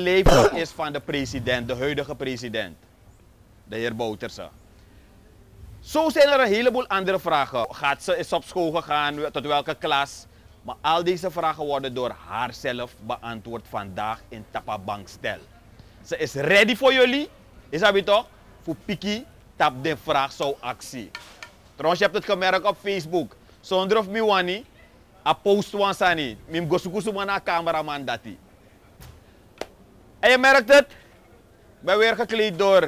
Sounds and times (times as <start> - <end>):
Speech: 0.0 - 2.8, 3.7 - 4.6, 5.8 - 21.2, 21.8 - 29.0, 30.2 - 32.8.